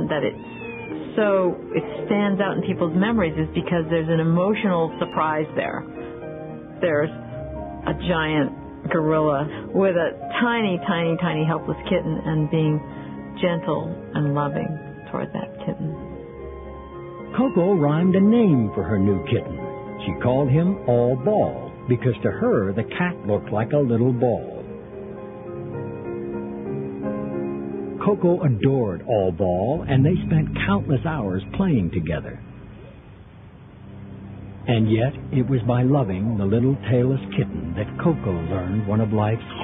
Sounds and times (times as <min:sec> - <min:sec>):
Speech: 0:00.0 - 0:00.4, 0:01.2 - 0:05.8, 0:06.8 - 0:07.2, 0:07.9 - 0:12.8, 0:13.4 - 0:16.0, 0:17.4 - 0:24.6, 0:28.0 - 0:32.4, 0:34.7 - 0:39.6
Music: 0:00.0 - 0:39.6.